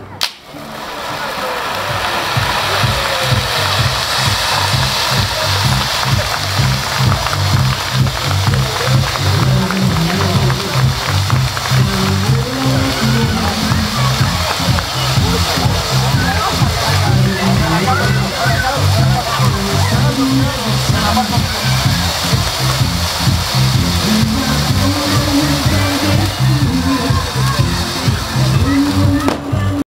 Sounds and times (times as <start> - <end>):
Speech: 0.0 - 7.3, 8.2 - 11.1, 11.7 - 22.4, 24.0 - 29.8
Music: 0.0 - 29.8.